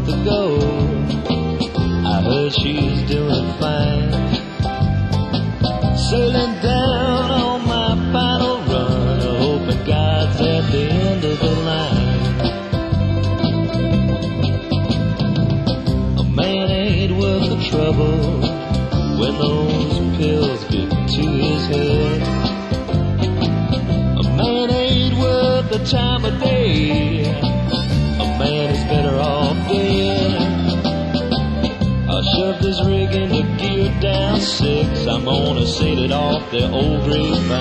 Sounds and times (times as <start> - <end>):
Country: 0.0 - 37.6.